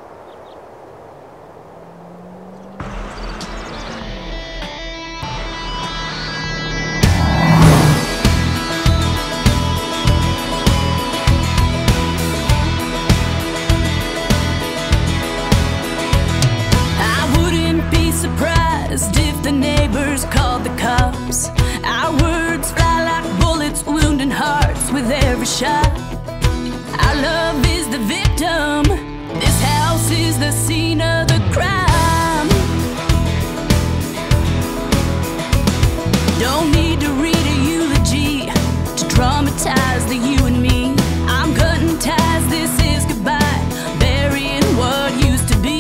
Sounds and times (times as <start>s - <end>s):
Music: 3.6s - 45.8s.